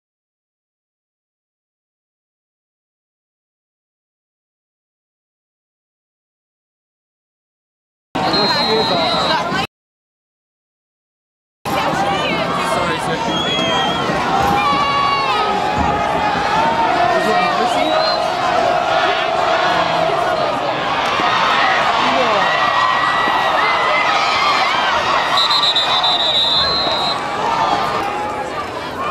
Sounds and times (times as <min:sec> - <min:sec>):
Speech: 0:11.7 - 0:15.6, 0:16.9 - 0:18.2.